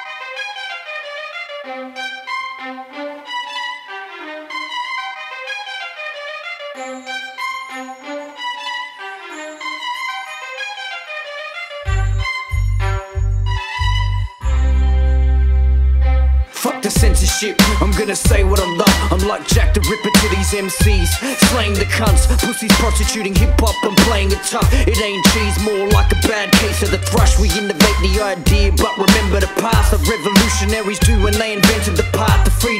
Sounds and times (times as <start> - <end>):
Music: 0.0 - 32.7.